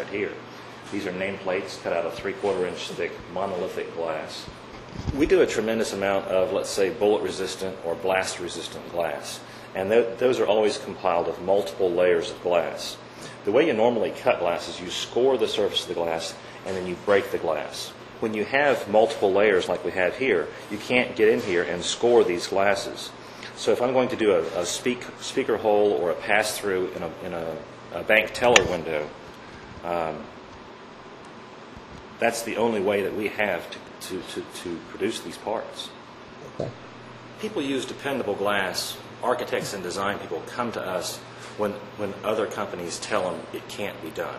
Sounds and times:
Speech: 0.0s - 29.2s, 29.8s - 30.3s, 32.2s - 36.7s, 37.4s - 44.3s.

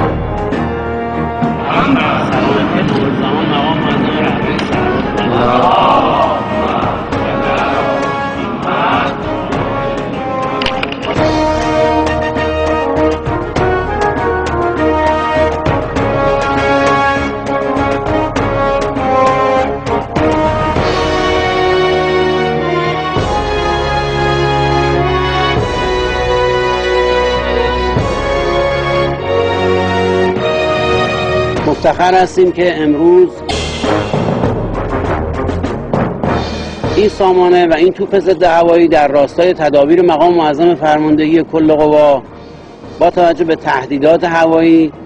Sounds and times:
Music: 0.0s - 45.0s
Outside, urban or manmade: 0.0s - 45.0s
Speech: 1.7s - 6.9s, 31.7s - 33.4s, 37.0s - 42.2s, 43.0s - 44.9s.

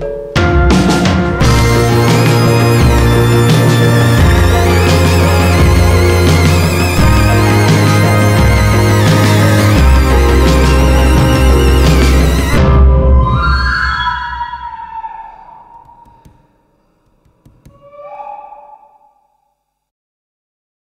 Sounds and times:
Music: 0.0s - 14.6s.

